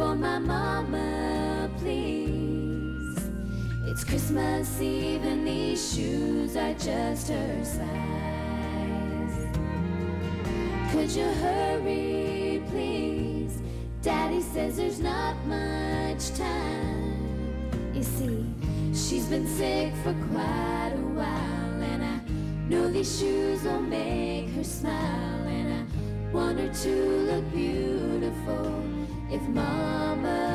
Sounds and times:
Female singing: 0.0s - 3.2s, 3.9s - 9.5s, 10.9s - 17.4s, 18.0s - 30.5s
Music: 0.0s - 30.5s.

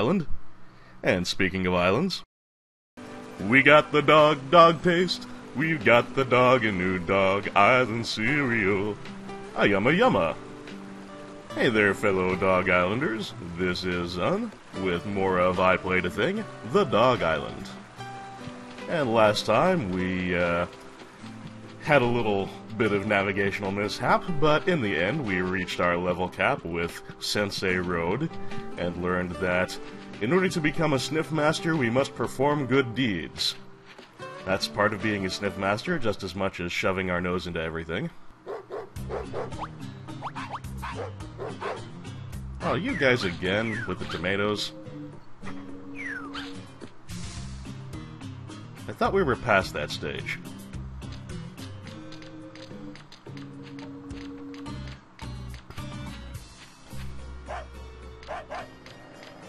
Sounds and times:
Speech: 0.0s - 0.3s, 1.0s - 2.3s, 9.6s - 10.4s, 11.6s - 17.8s, 18.8s - 20.7s, 21.8s - 33.6s, 34.4s - 38.2s, 42.6s - 44.8s, 48.9s - 50.5s
Music: 3.0s - 59.4s.

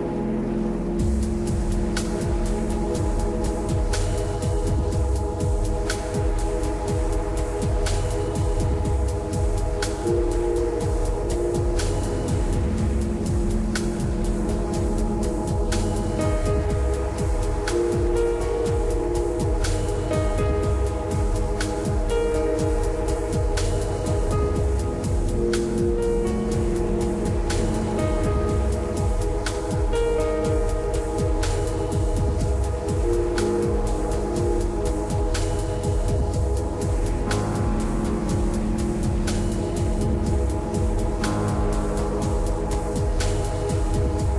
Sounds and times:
Music: 0.0s - 44.3s.

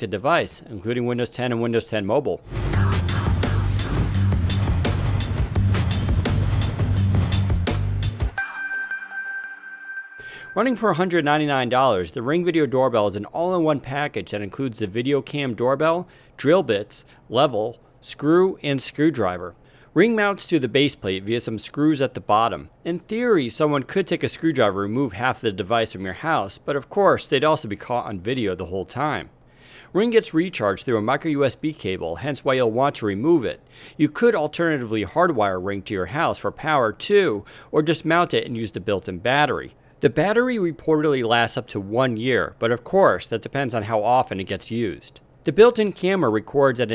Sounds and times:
Speech: 0.0s - 2.4s, 10.6s - 29.3s, 30.0s - 46.9s.

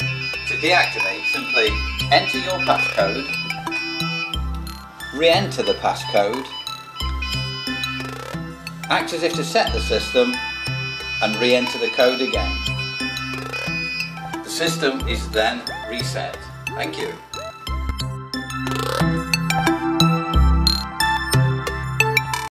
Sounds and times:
Music: 0.0s - 22.5s
Speech: 0.5s - 3.3s, 5.2s - 6.5s, 8.9s - 10.4s, 11.2s - 12.6s, 14.4s - 17.2s.

